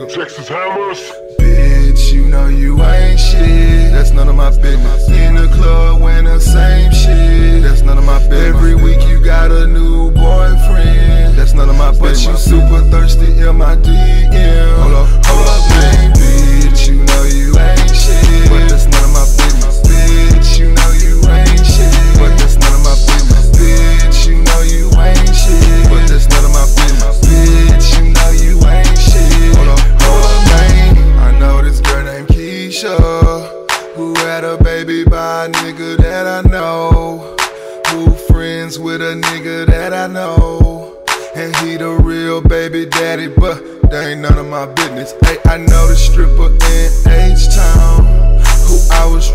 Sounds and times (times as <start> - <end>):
Music: 0.0 - 49.3.